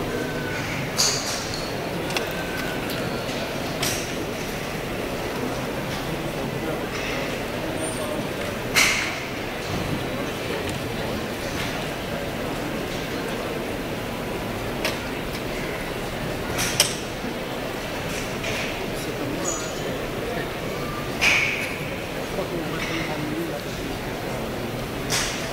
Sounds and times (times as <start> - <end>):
Speech: 5.2 - 13.8, 17.5 - 25.5.